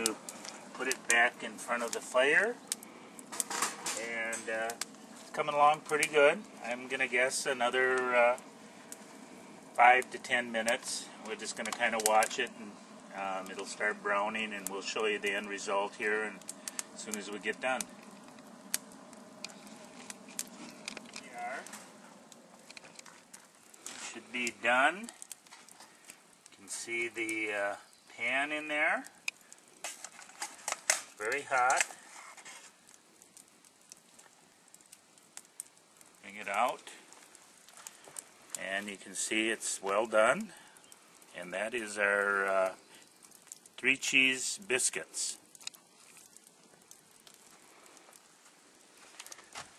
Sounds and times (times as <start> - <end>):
Outside, rural or natural: 0.0 - 49.7
Speech: 0.8 - 2.6, 4.0 - 8.4, 9.8 - 16.4, 17.0 - 17.9, 21.2 - 21.7, 24.0 - 25.1, 26.6 - 29.1, 31.2 - 31.8, 36.2 - 37.0, 38.6 - 40.5, 41.4 - 42.8, 43.8 - 45.4.